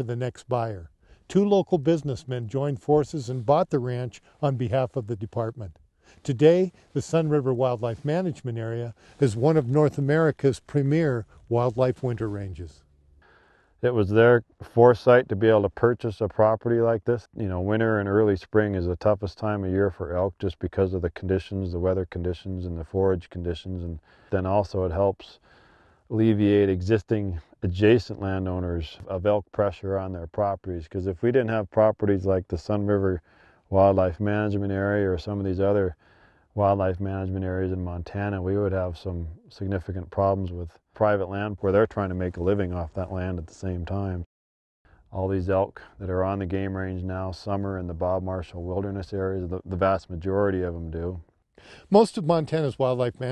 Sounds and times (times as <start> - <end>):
Speech: 0.0 - 12.8, 13.8 - 25.4, 26.1 - 36.0, 36.6 - 44.3, 45.1 - 51.2, 51.8 - 53.3.